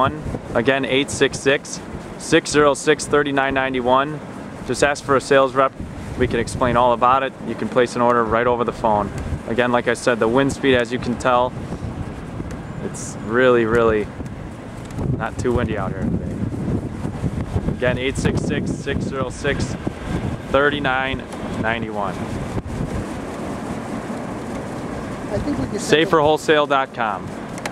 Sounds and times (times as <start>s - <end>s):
Wind noise (microphone): 0.0s - 3.9s, 4.6s - 27.7s.